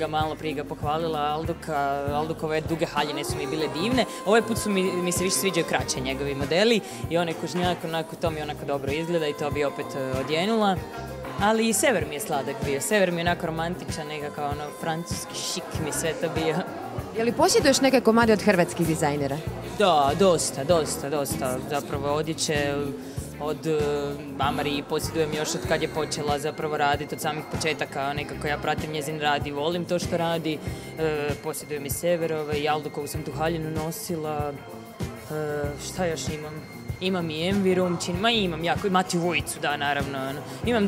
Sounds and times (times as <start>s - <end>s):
Speech: 0.0s - 34.6s, 35.3s - 40.8s
Music: 0.0s - 40.8s.